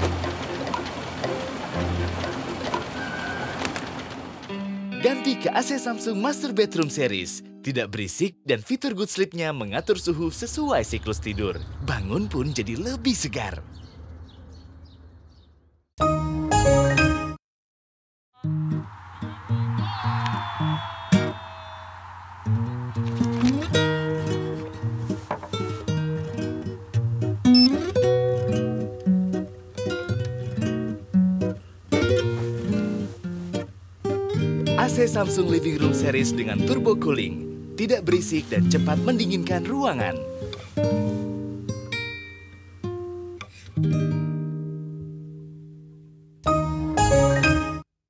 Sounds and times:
Music: 0.0 - 3.4, 4.5 - 8.4, 16.0 - 17.4, 18.4 - 21.4, 22.6 - 47.9.

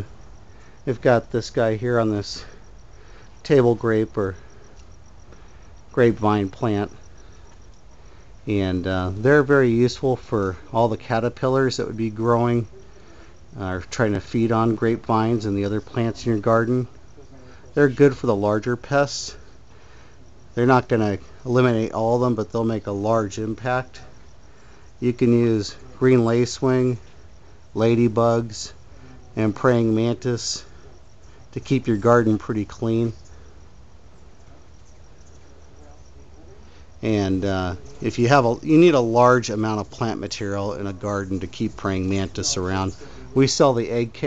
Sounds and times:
Speech: 0.9 - 2.6, 3.4 - 4.5, 5.9 - 7.0, 8.4 - 19.5, 20.6 - 24.3, 25.0 - 27.0, 27.7 - 33.3, 35.4 - 44.2.

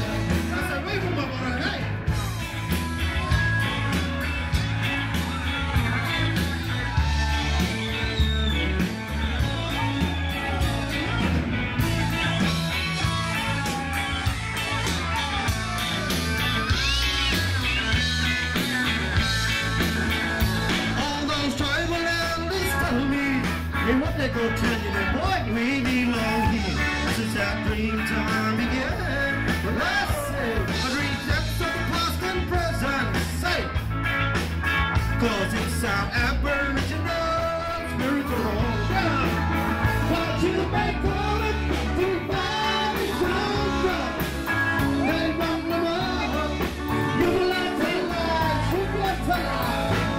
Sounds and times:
Ska: 0.0 - 50.1
Singing: 20.4 - 33.7, 35.2 - 50.1.

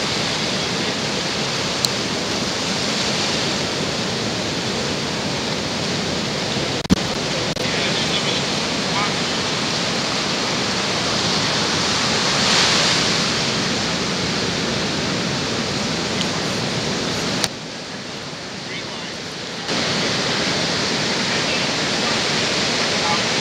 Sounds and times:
Outside, rural or natural: 0.0 - 23.4
Pink noise: 0.0 - 23.4
Speech: 7.4 - 9.4, 18.6 - 20.4, 21.3 - 23.4.

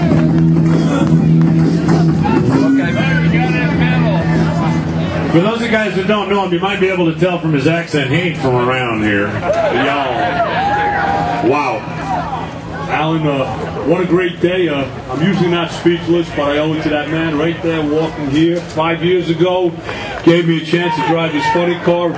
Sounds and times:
Music: 0.0 - 6.1
Speech: 2.5 - 10.2, 12.8 - 22.1.

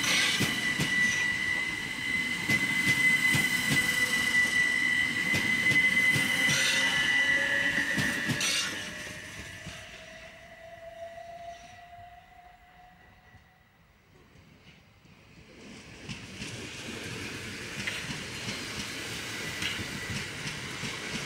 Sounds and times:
Outside, urban or manmade: 0.0 - 21.2
Train: 0.0 - 21.2.

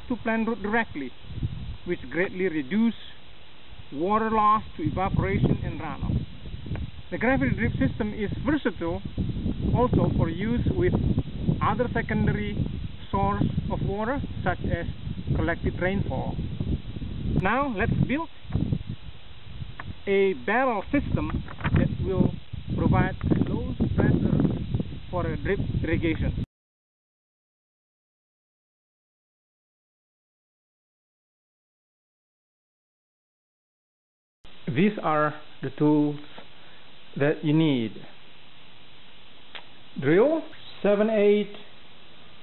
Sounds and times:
Speech: 0.1 - 1.2, 1.9 - 3.2, 3.9 - 6.2, 7.1 - 9.0, 9.8 - 11.0, 11.6 - 16.4, 17.4 - 18.3, 20.1 - 24.4, 25.1 - 26.4, 34.7 - 36.3, 37.2 - 38.2, 40.0 - 41.7.

